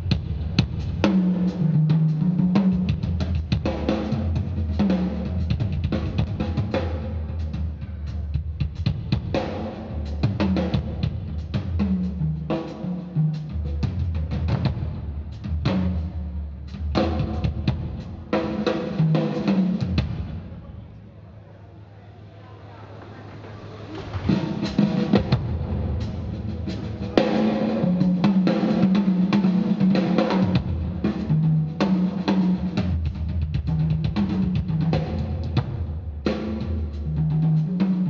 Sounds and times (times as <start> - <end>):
Music: 0.0 - 20.8, 23.2 - 38.0.